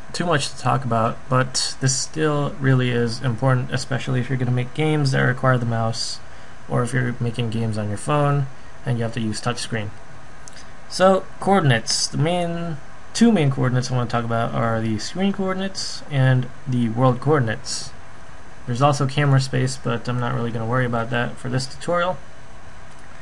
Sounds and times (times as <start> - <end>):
Speech: 0.1 - 10.0, 10.9 - 18.0, 18.7 - 22.2.